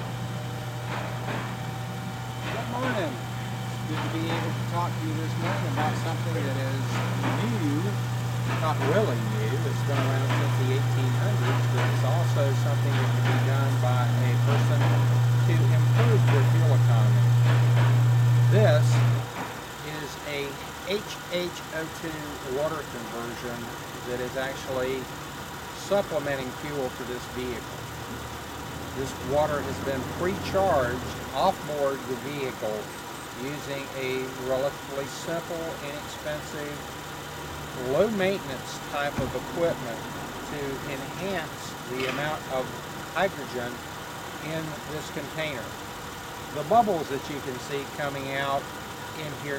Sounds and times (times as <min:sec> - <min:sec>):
Speech: 0:02.4 - 0:17.3, 0:18.5 - 0:19.1, 0:19.8 - 0:25.1, 0:25.8 - 0:27.6, 0:29.0 - 0:36.8, 0:37.8 - 0:43.8, 0:44.4 - 0:45.7, 0:46.6 - 0:49.5
Car: 0:18.6 - 0:49.5.